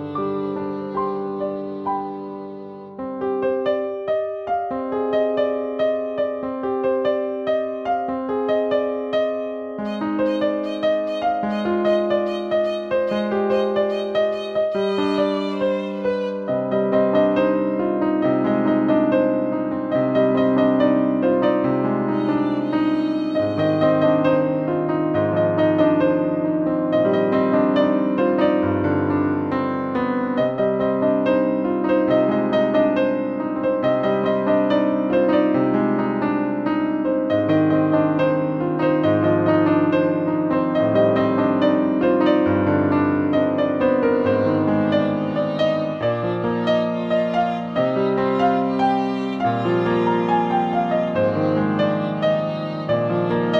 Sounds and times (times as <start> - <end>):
Musical instrument: 0.0 - 3.5, 9.8 - 16.7.